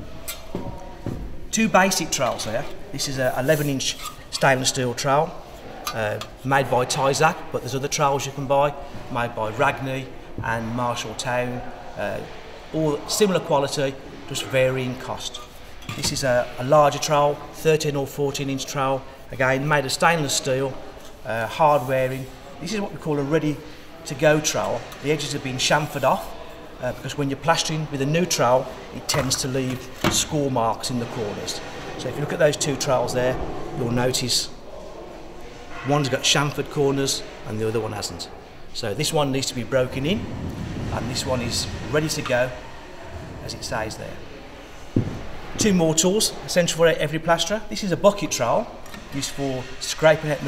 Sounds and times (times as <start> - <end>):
Speech: 1.5 - 34.6, 35.8 - 40.2, 40.9 - 42.6, 43.4 - 44.2, 45.6 - 50.4.